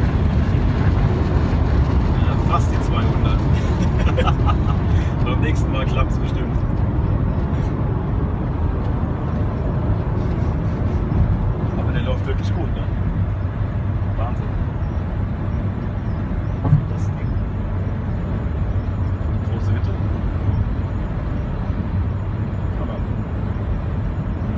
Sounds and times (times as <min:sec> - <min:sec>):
Speech: 0:02.2 - 0:03.4, 0:11.8 - 0:12.9.